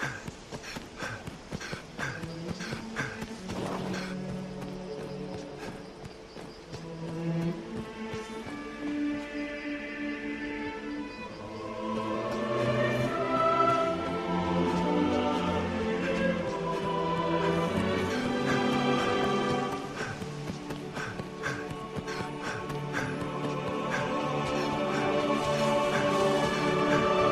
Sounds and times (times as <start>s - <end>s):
Run: 0.0s - 10.5s, 11.4s - 27.3s
Music: 1.6s - 27.3s.